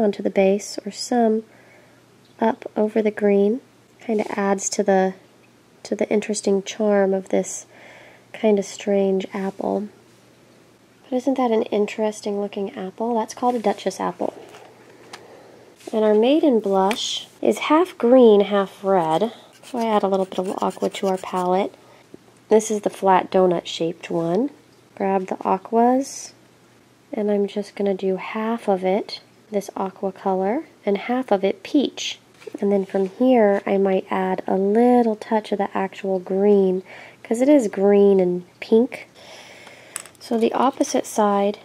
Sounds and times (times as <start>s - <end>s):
Speech: 0.0s - 1.5s, 2.4s - 5.2s, 5.8s - 7.7s, 8.3s - 10.0s, 11.1s - 14.4s, 15.8s - 21.8s, 22.5s - 26.4s, 27.1s - 39.1s, 40.2s - 41.6s.